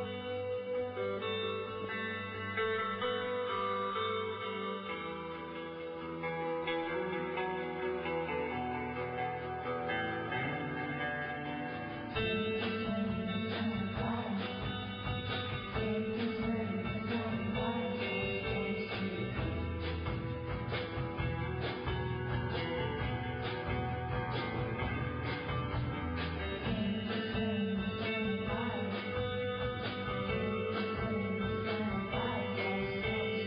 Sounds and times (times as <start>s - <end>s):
Music: 0.0s - 33.4s.